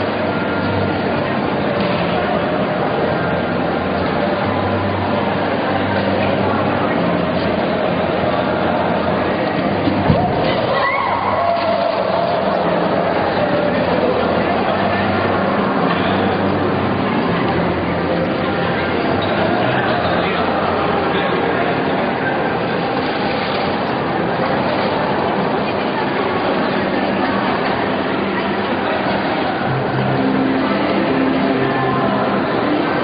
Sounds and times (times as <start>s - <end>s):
Speech: 0.0s - 33.0s.